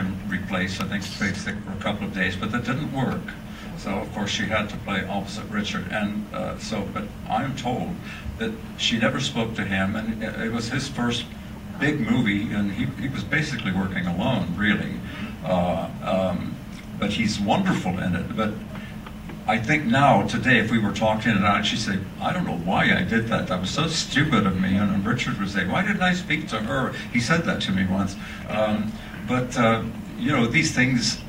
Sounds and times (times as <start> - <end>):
Speech: 0.0 - 18.7, 19.4 - 31.2.